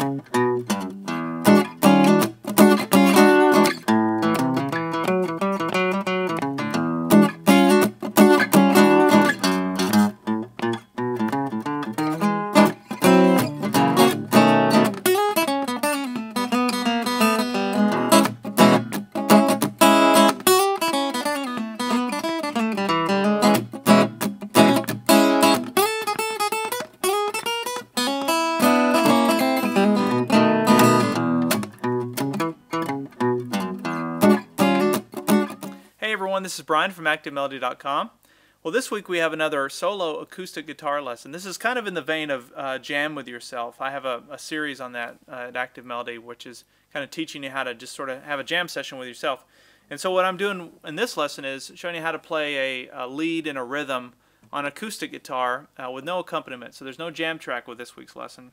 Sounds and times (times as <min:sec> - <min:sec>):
Guitar: 0:00.0 - 0:46.5
Speech: 0:36.0 - 0:58.5.